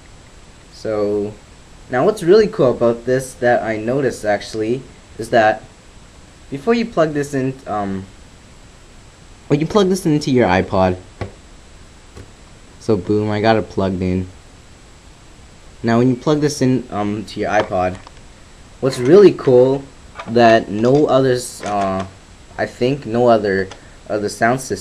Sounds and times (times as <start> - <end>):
Speech: 0.8 - 5.7, 6.5 - 8.1, 9.5 - 11.1, 12.8 - 14.4, 15.8 - 18.1, 18.8 - 24.8.